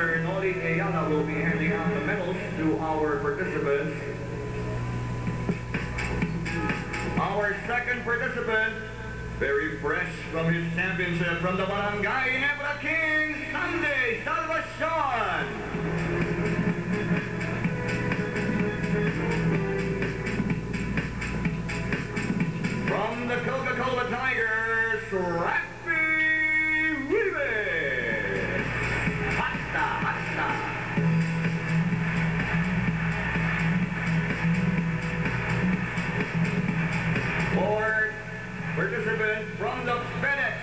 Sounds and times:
Speech: 0.0s - 4.2s, 7.2s - 15.6s, 22.9s - 28.6s, 37.5s - 38.2s, 38.8s - 40.6s
Music: 0.0s - 12.1s, 12.7s - 40.6s.

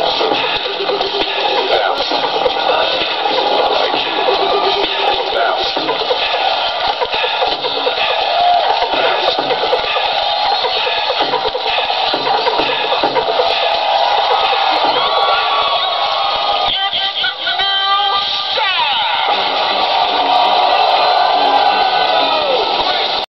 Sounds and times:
Music: 0.0s - 23.3s.

